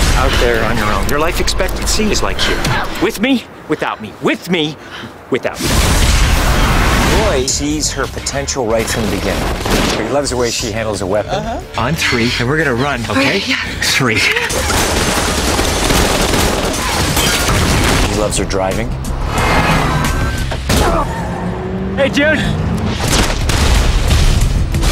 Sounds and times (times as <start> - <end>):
Music: 7.7 - 13.5, 17.1 - 21.2, 24.2 - 24.9.